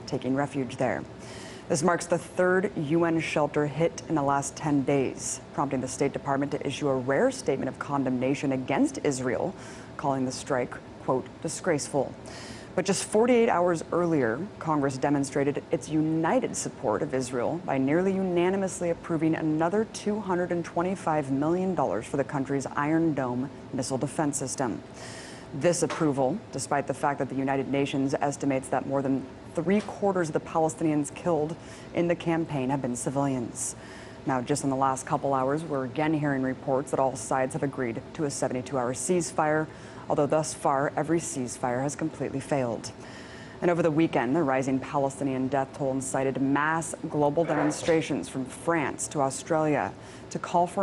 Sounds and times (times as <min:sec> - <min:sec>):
Speech: 0:00.0 - 0:01.1, 0:01.7 - 0:12.2, 0:12.8 - 0:24.8, 0:25.6 - 0:42.9, 0:43.6 - 0:50.8.